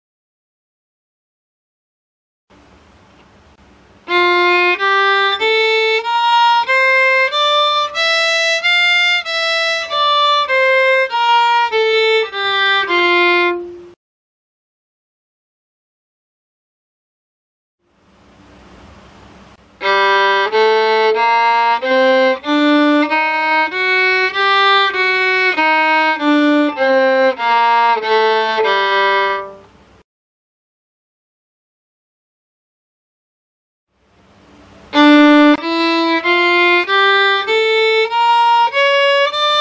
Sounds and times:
Violin, fiddle: 4.0 - 14.0, 19.8 - 29.7, 34.9 - 39.6.

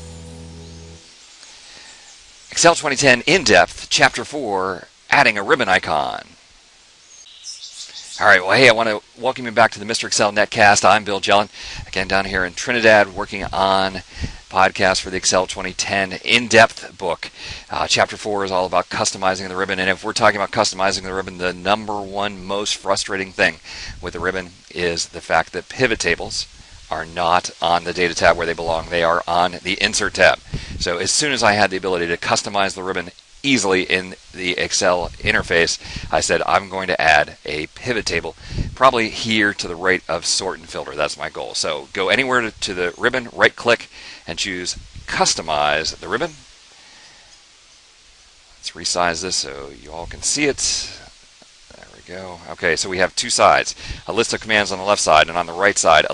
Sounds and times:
Chirp, tweet: 7.0 - 8.2.

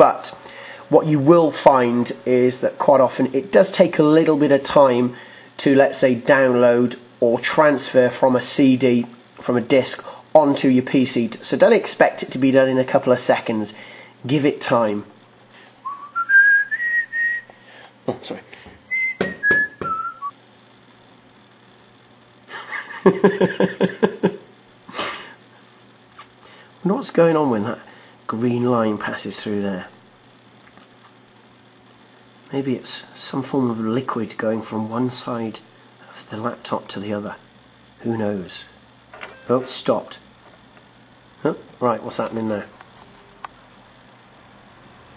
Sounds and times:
Speech: 0.0 - 15.1, 18.0 - 18.5, 26.8 - 30.0, 32.5 - 38.8, 39.5 - 40.3, 41.4 - 42.8.

